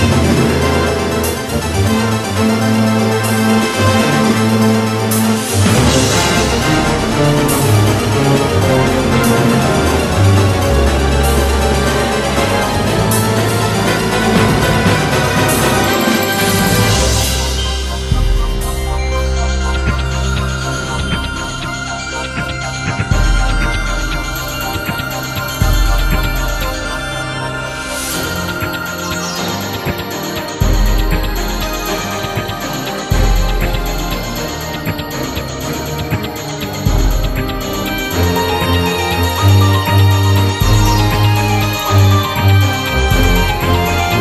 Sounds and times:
Music: 0:00.0 - 0:44.2.

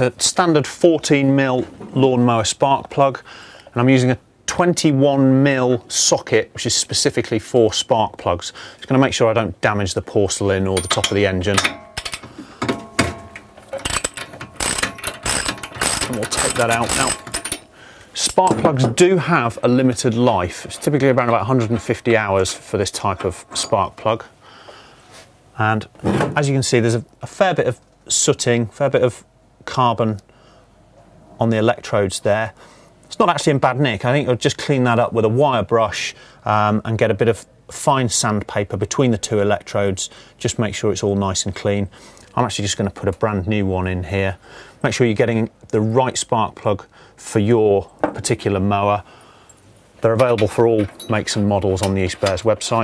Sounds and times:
Speech: 0:00.0 - 0:11.7, 0:16.1 - 0:17.2, 0:18.2 - 0:24.3, 0:25.6 - 0:30.2, 0:31.4 - 0:49.1, 0:50.0 - 0:52.8.

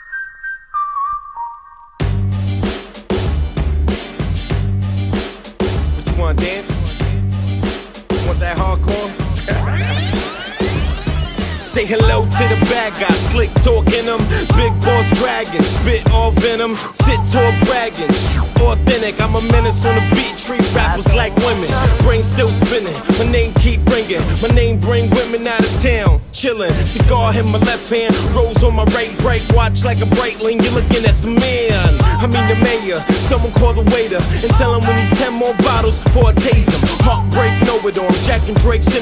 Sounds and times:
Music: 0:00.0 - 0:39.0.

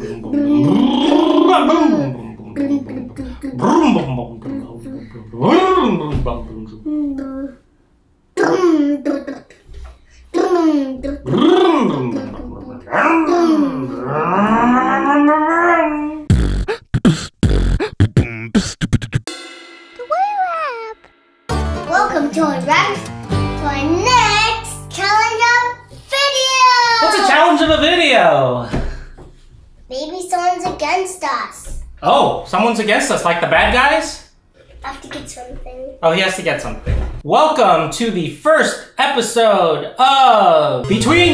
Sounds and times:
Beatboxing: 0:00.0 - 0:06.2, 0:11.2 - 0:12.3, 0:16.3 - 0:19.3, 0:40.9 - 0:41.3.

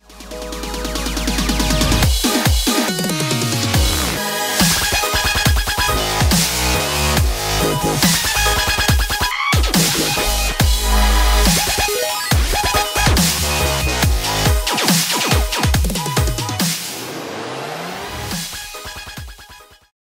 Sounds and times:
Dubstep: 0:00.0 - 0:19.6.

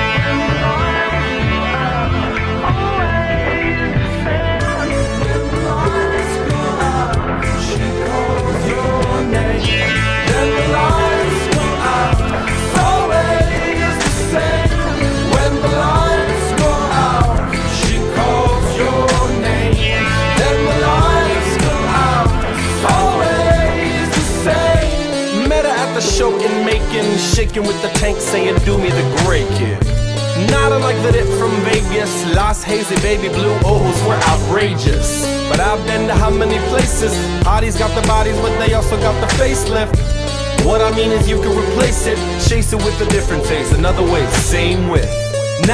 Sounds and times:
Sampler: 0:00.0 - 0:45.7.

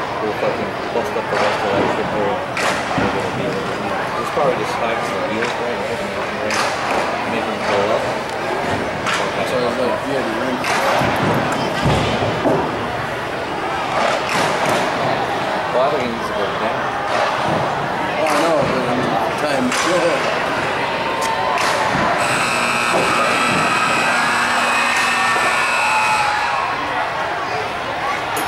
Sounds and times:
Speech: 0:00.0 - 0:12.2, 0:15.6 - 0:16.8, 0:18.0 - 0:20.4
Inside, large room or hall: 0:00.0 - 0:28.4.

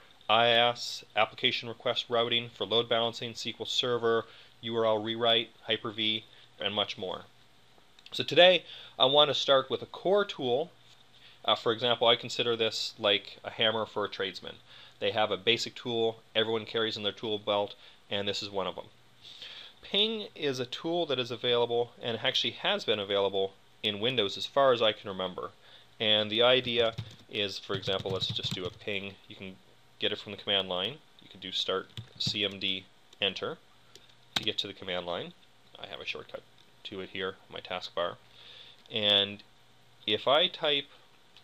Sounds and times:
Speech: 0:00.3 - 0:07.3, 0:08.1 - 0:10.8, 0:11.4 - 0:19.0, 0:19.8 - 0:33.6, 0:34.4 - 0:38.2, 0:38.9 - 0:40.9.

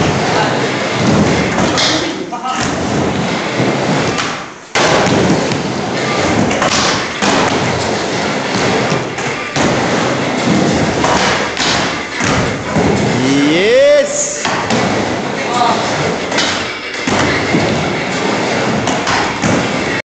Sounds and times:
Speech: 0:15.4 - 0:15.9.

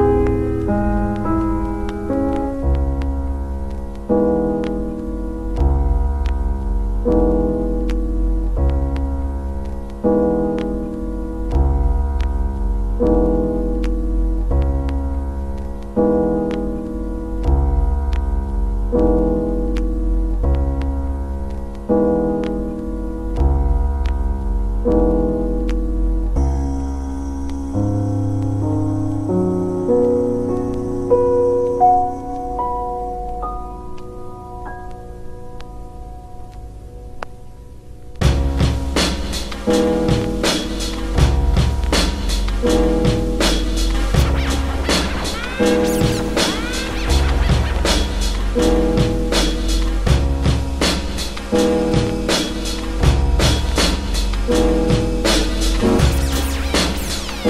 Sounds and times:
Music: 0:00.0 - 0:57.4.

